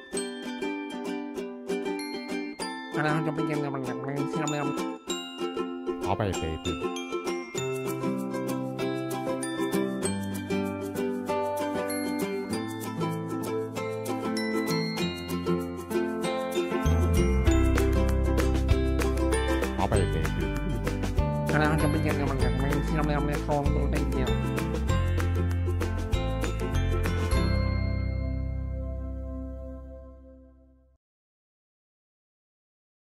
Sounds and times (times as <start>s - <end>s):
Music: 0.0s - 31.0s.